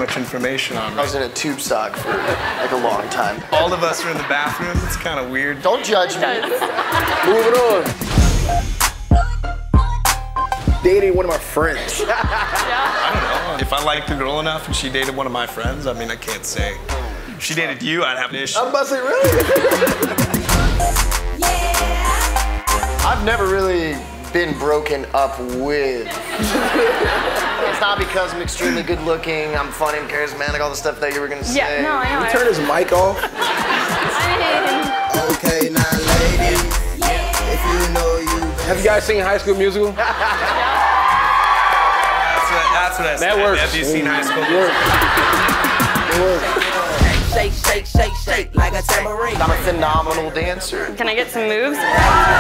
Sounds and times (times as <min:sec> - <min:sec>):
Music: 0:00.0 - 0:18.1, 0:19.2 - 0:52.4
Speech: 0:23.1 - 0:26.1, 0:42.4 - 0:44.8.